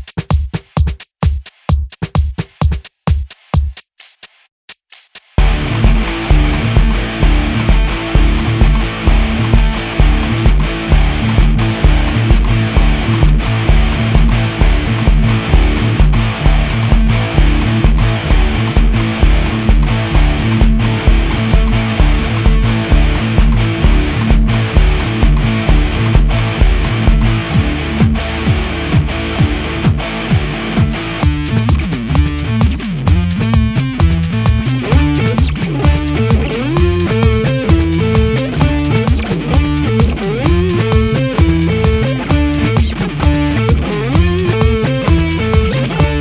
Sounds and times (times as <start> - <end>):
Electric guitar: 5.4 - 46.2.